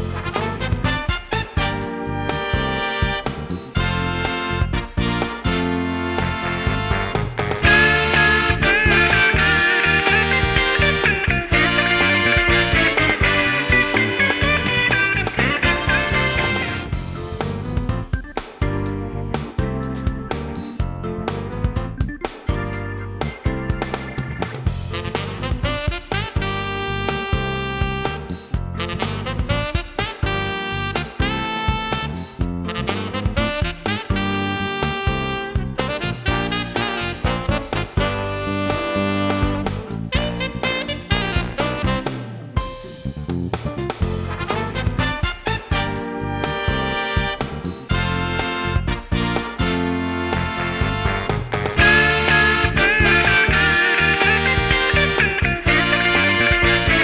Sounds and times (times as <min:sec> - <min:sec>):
Music: 0:00.0 - 0:57.0.